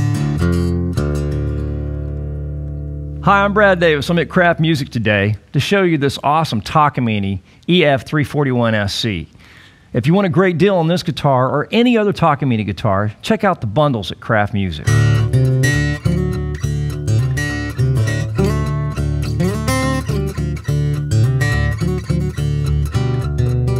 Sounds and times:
Electric guitar: 0:00.0 - 0:03.3, 0:14.9 - 0:23.7
Strum: 0:00.0 - 0:04.9, 0:14.9 - 0:23.7
Speech: 0:03.2 - 0:09.4, 0:10.0 - 0:14.9.

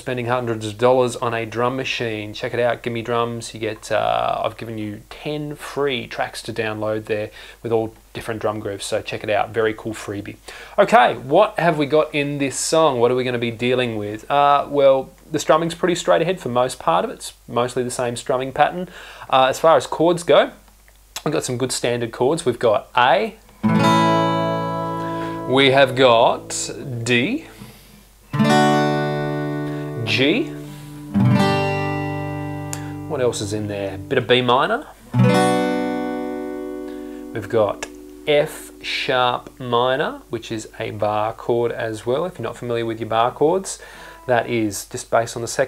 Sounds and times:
Speech: 0:00.0 - 0:20.6, 0:21.2 - 0:23.4, 0:25.5 - 0:27.5, 0:30.0 - 0:30.6, 0:33.1 - 0:35.0, 0:37.4 - 0:45.6
Acoustic guitar: 0:23.4 - 0:41.3, 0:43.2 - 0:44.7
Strum: 0:23.6 - 0:40.4.

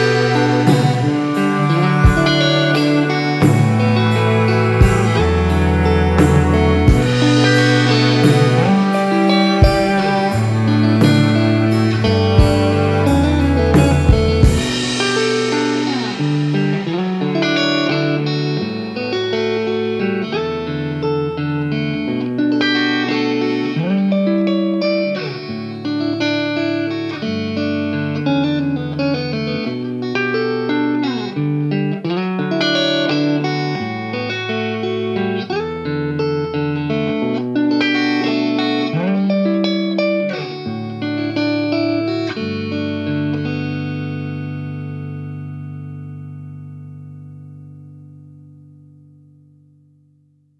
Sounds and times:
Music: 0:00.0 - 0:50.5.

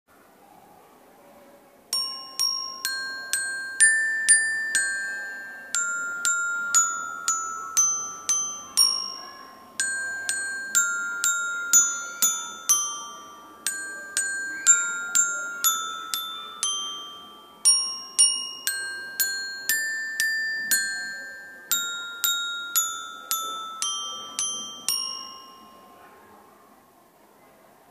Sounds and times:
Marimba, xylophone: 0:01.9 - 0:26.4.

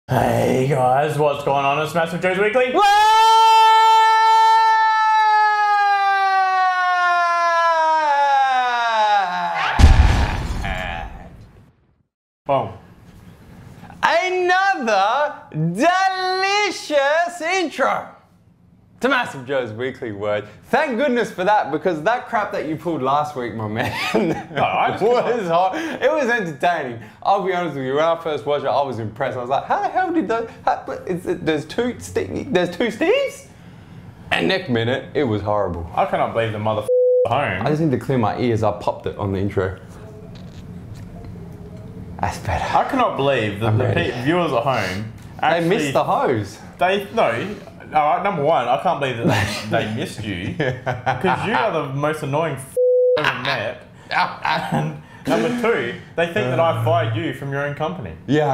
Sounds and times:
Speech: 0:00.1 - 0:02.9, 0:12.5 - 0:12.8, 0:14.0 - 0:18.2, 0:19.0 - 0:23.9, 0:24.6 - 0:33.5, 0:34.3 - 0:39.9, 0:42.2 - 0:50.6, 0:51.2 - 0:58.5
Inside, small room: 0:00.1 - 0:58.5.

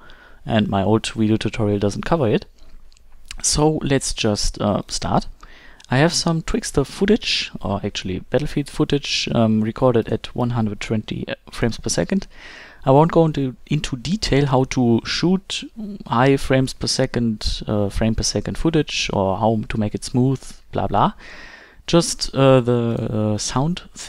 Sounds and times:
Speech: 0:00.5 - 0:02.5, 0:03.3 - 0:05.3, 0:05.9 - 0:21.2, 0:21.9 - 0:24.0.

